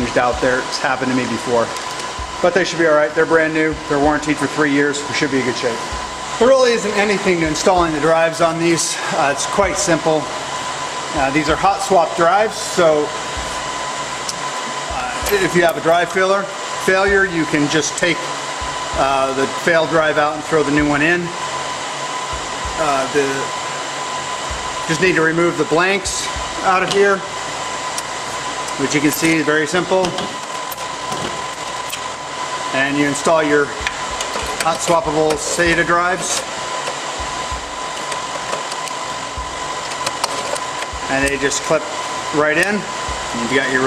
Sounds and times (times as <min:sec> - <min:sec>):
Speech: 0:00.0 - 0:01.8, 0:02.4 - 0:10.3, 0:11.2 - 0:13.2, 0:14.9 - 0:18.3, 0:19.0 - 0:21.4, 0:22.8 - 0:23.6, 0:24.9 - 0:27.3, 0:28.8 - 0:30.3, 0:32.7 - 0:33.8, 0:34.6 - 0:36.4, 0:41.1 - 0:43.8.